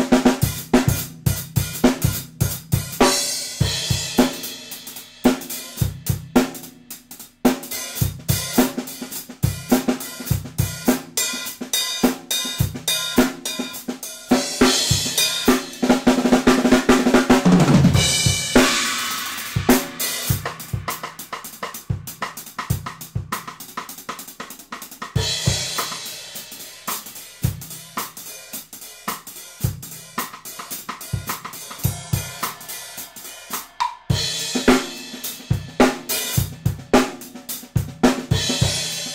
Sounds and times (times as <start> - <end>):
Hi-hat: 18.6 - 37.8.